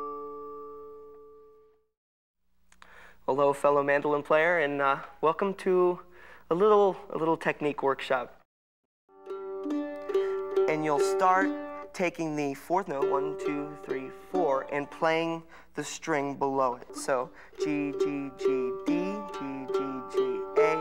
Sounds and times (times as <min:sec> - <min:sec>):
Speech: 0:03.3 - 0:08.4, 0:10.7 - 0:18.3
Mandolin: 0:09.2 - 0:15.4, 0:16.8 - 0:20.8.